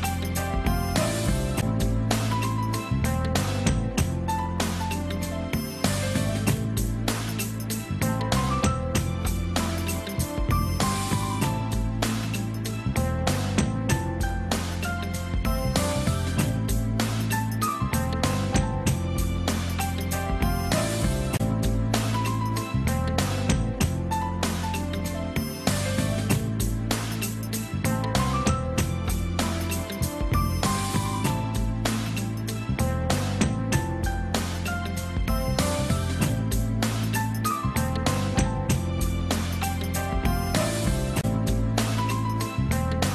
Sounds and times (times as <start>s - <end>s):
Music: 0.0s - 43.1s.